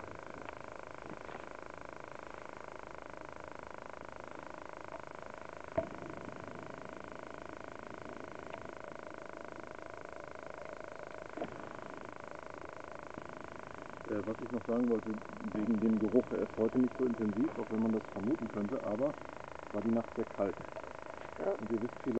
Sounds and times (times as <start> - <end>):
Speech: 14.1 - 20.6, 21.4 - 22.1.